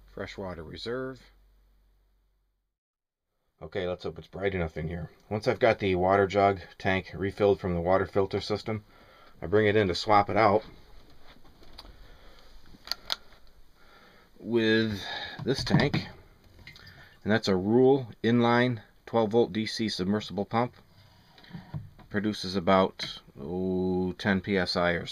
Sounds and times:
Speech: 0:00.0 - 0:01.4, 0:03.6 - 0:08.8, 0:09.4 - 0:10.7, 0:14.4 - 0:16.2, 0:17.2 - 0:20.7, 0:22.1 - 0:25.1.

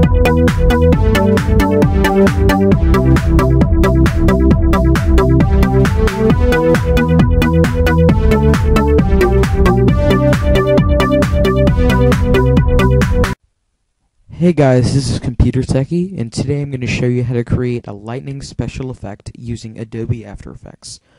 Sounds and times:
Electronica: 0:00.0 - 0:13.4.

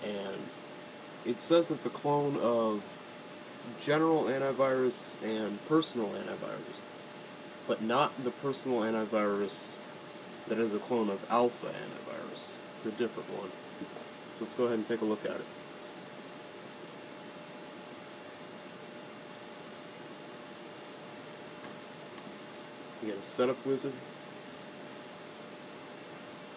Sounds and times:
Speech: 0:00.0 - 0:00.5, 0:01.2 - 0:02.9, 0:03.7 - 0:06.9, 0:07.7 - 0:09.8, 0:10.5 - 0:13.6, 0:14.3 - 0:15.5, 0:23.0 - 0:24.1.

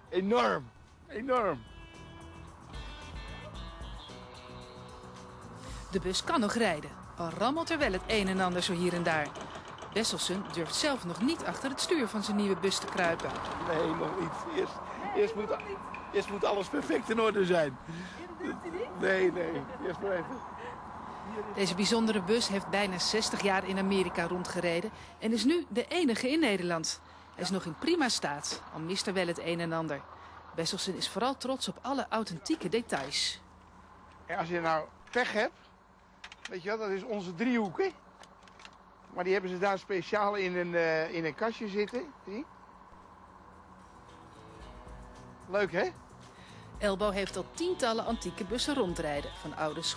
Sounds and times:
Music: 0:00.0 - 0:09.2, 0:43.8 - 0:49.9
Vehicle: 0:00.0 - 0:49.9
Speech: 0:10.0 - 0:17.7, 0:46.8 - 0:49.9.

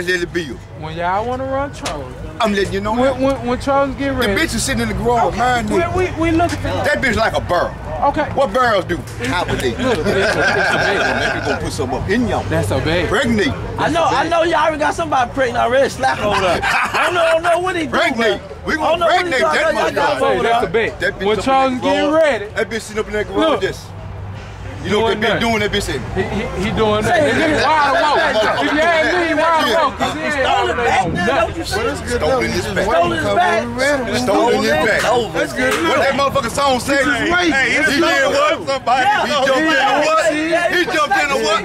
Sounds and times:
Speech: 0:24.8 - 0:41.6.

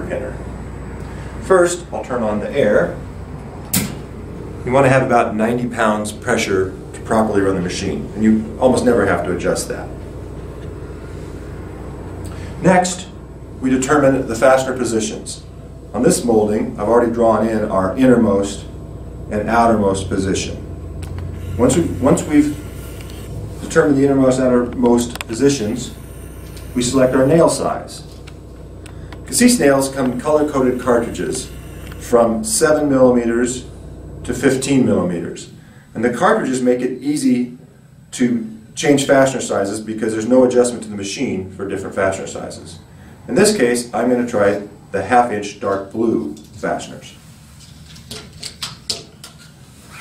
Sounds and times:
Speech: 0:00.0 - 0:00.4, 0:01.4 - 0:03.0, 0:04.6 - 0:10.0, 0:12.6 - 0:18.7, 0:19.3 - 0:20.6, 0:21.6 - 0:22.6, 0:23.6 - 0:26.0, 0:26.8 - 0:28.1, 0:29.3 - 0:33.7, 0:34.3 - 0:47.2.

